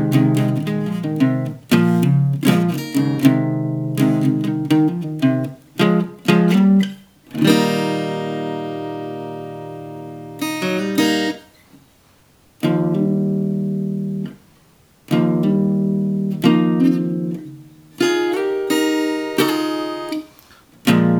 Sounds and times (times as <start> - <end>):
Acoustic guitar: 0.0 - 21.1.